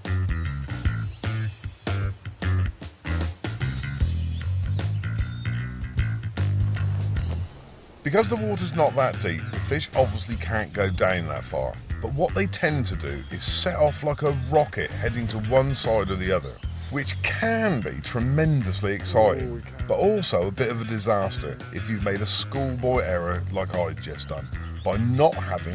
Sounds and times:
Music: 0.0s - 25.7s
Speech: 8.1s - 25.7s.

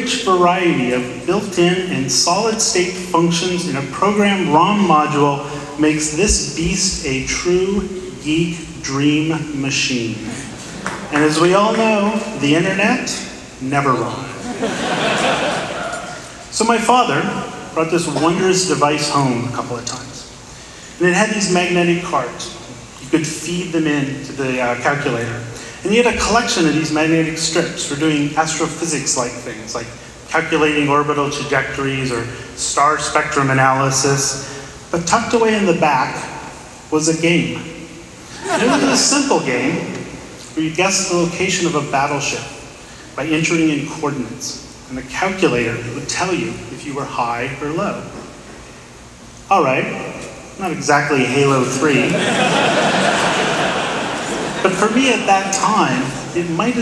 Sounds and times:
Male speech, man speaking: 0.0s - 10.3s, 11.1s - 14.4s, 16.5s - 20.3s, 21.0s - 37.8s, 38.6s - 42.6s, 43.2s - 48.2s, 49.5s - 52.2s, 54.6s - 56.8s
Narration, monologue: 0.0s - 56.8s.

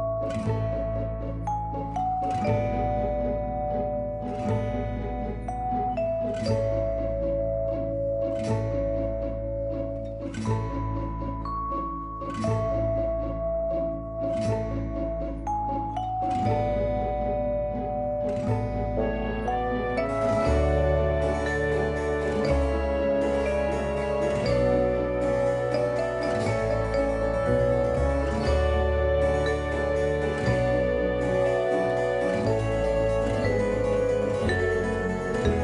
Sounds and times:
Music: 0.0s - 35.6s.

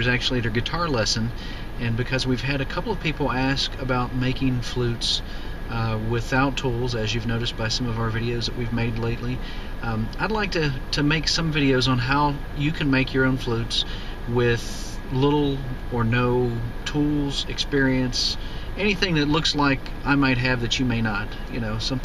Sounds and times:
Speech: 0.0s - 22.0s.

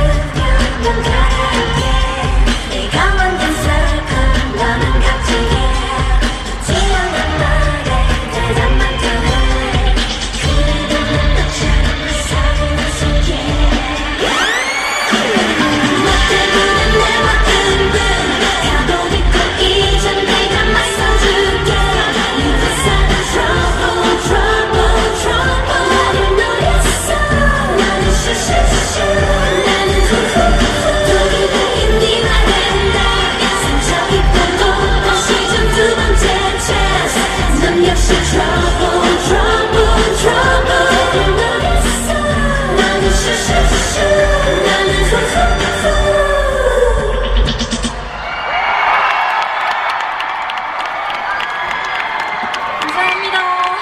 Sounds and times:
Singing: 0.0s - 48.2s
Pop music: 0.0s - 53.8s
Rock and roll: 0.0s - 53.8s.

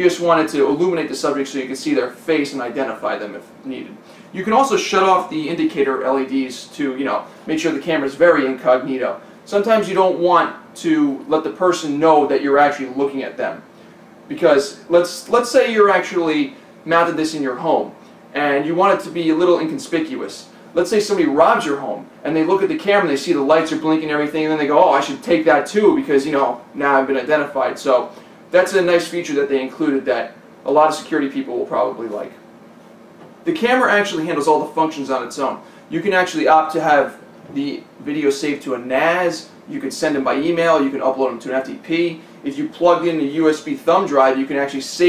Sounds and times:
Speech: 0.0s - 13.7s, 14.3s - 32.4s, 33.4s - 45.0s
Inside, small room: 0.0s - 45.0s.

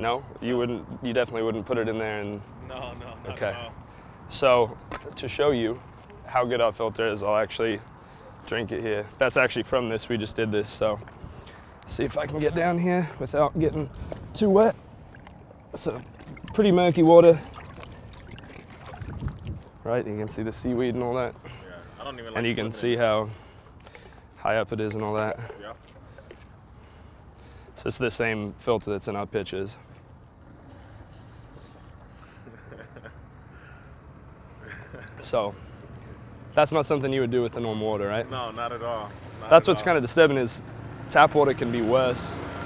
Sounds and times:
Stream: 9.1s - 21.6s, 22.4s - 29.2s
Gurgling: 15.0s - 19.8s.

